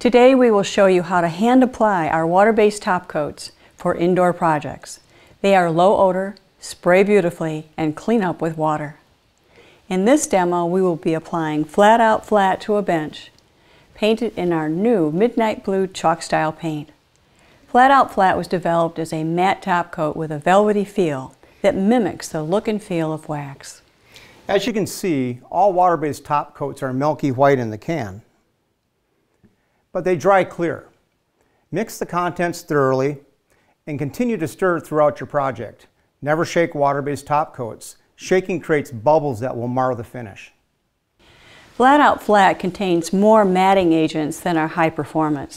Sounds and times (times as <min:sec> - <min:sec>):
Speech: 0:00.0 - 0:09.0, 0:09.9 - 0:13.3, 0:14.0 - 0:17.0, 0:17.7 - 0:23.8, 0:24.5 - 0:28.3, 0:30.0 - 0:31.0, 0:31.7 - 0:33.3, 0:33.9 - 0:40.6, 0:41.8 - 0:45.5.